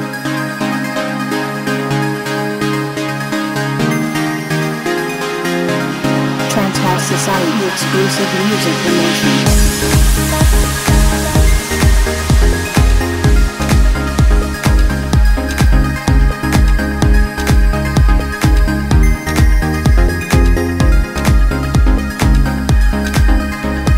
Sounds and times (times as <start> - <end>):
Music: 0.0 - 23.9
Speech: 6.5 - 9.5.